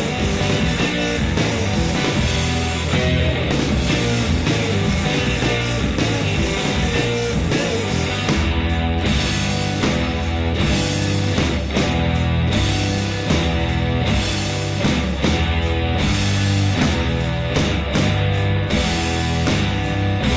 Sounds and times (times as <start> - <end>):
Rock music: 0.0 - 20.3.